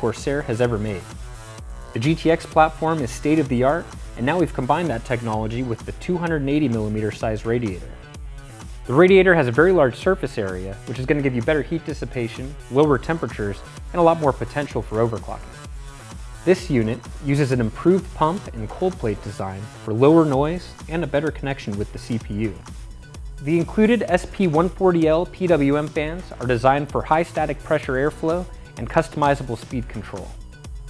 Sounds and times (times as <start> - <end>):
Speech: 0.0 - 1.0, 2.0 - 8.0, 8.9 - 15.5, 16.5 - 22.6, 23.5 - 30.4
Music: 0.0 - 30.8.